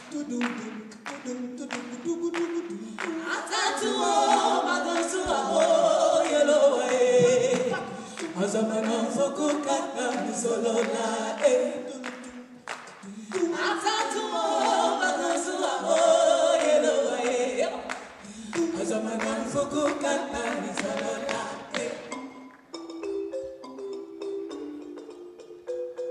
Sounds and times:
Music: 0.0s - 26.1s.

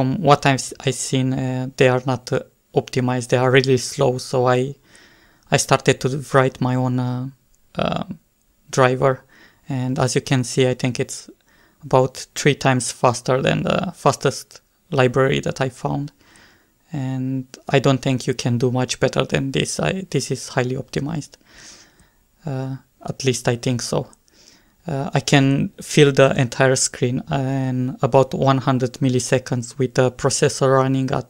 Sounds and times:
Speech: 0.0s - 4.8s, 5.5s - 16.2s, 16.9s - 21.4s, 22.4s - 24.2s, 24.8s - 31.3s.

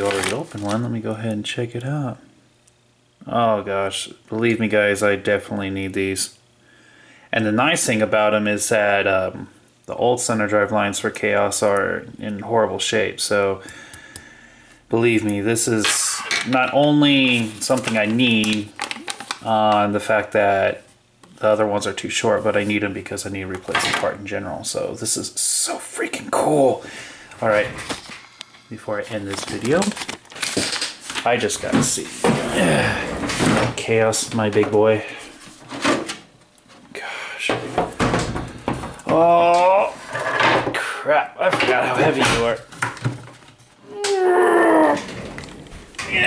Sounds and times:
Speech: 0.0s - 2.3s, 3.2s - 6.4s, 7.3s - 13.6s, 14.9s - 18.7s, 19.4s - 26.8s, 27.4s - 27.8s, 28.7s - 30.0s, 31.2s - 33.0s, 33.6s - 35.2s, 39.1s - 40.0s, 40.7s - 42.7s, 46.0s - 46.2s
Inside, small room: 0.0s - 46.2s.

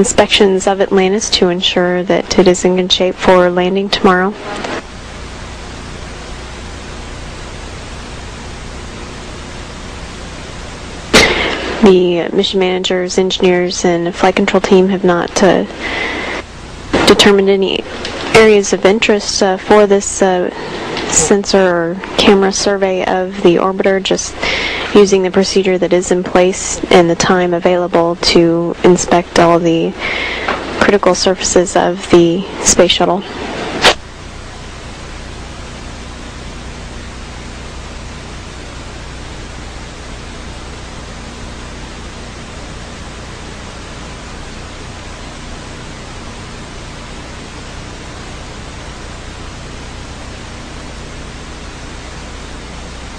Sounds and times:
Speech: 0.0s - 4.6s, 11.2s - 16.0s, 17.0s - 33.4s.

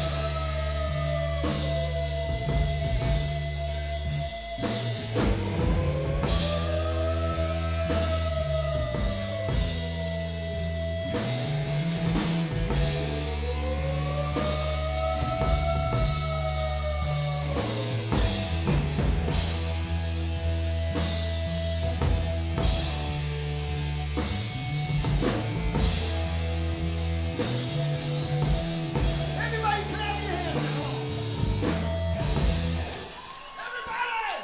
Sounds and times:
Soul music: 0.0s - 34.4s.

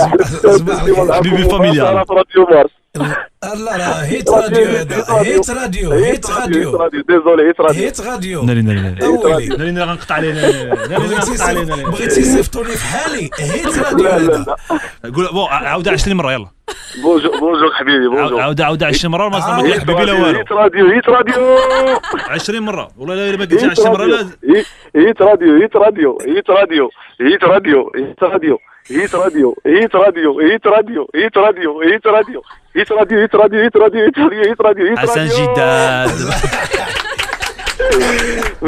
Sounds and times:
Radio: 0.0s - 16.2s, 17.0s - 37.0s
Speech: 0.0s - 37.0s, 37.8s - 38.6s.

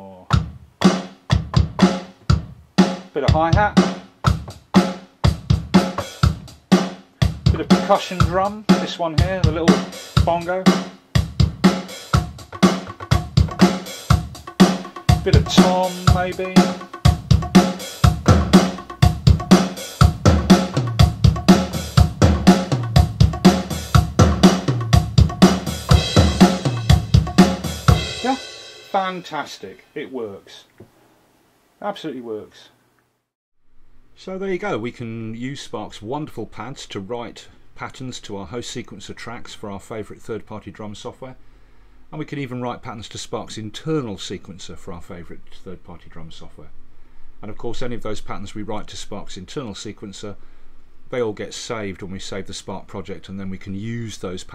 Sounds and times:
Speech: 0.0s - 0.4s, 3.2s - 3.8s, 7.5s - 10.8s, 15.2s - 16.8s, 28.2s - 30.7s, 31.8s - 32.8s, 34.2s - 41.4s, 42.1s - 46.8s, 47.4s - 50.4s, 51.1s - 54.5s
Drum machine: 0.3s - 29.5s.

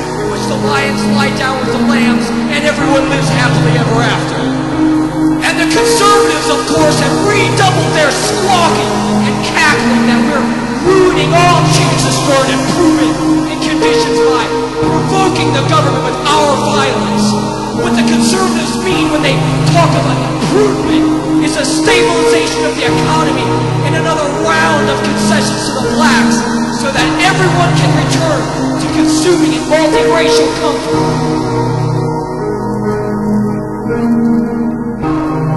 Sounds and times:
Speech: 0.0s - 4.6s, 5.4s - 31.0s
Music: 0.0s - 35.5s.

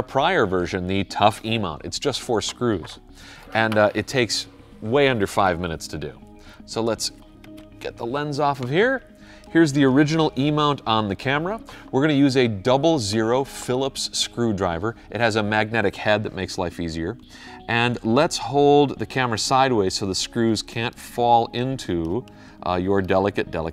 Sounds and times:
Speech: 0.0s - 7.1s, 9.6s - 23.7s
Music: 0.0s - 23.7s.

